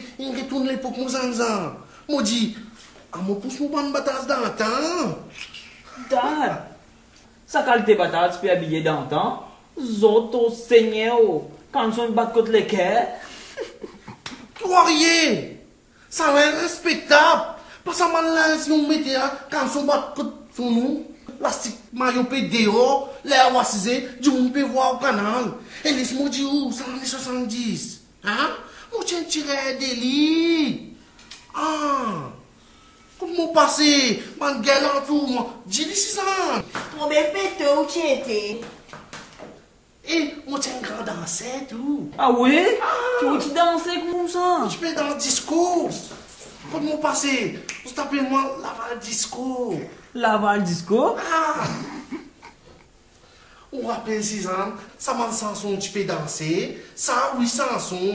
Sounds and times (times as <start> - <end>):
Speech: 0.0 - 6.8, 7.5 - 13.2, 14.6 - 32.4, 33.2 - 38.8, 40.0 - 51.9, 53.7 - 58.1
Laughter: 13.2 - 14.5, 51.6 - 52.8.